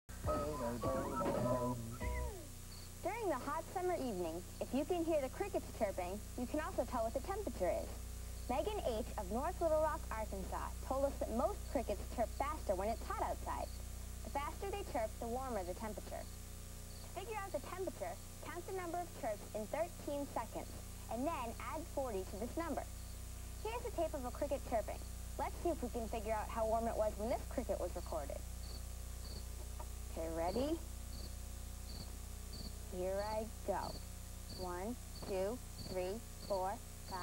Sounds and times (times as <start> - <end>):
Cricket: 2.7 - 3.0, 13.5 - 13.8, 16.2 - 17.2, 22.9 - 23.2, 28.6 - 29.5, 30.5 - 37.2.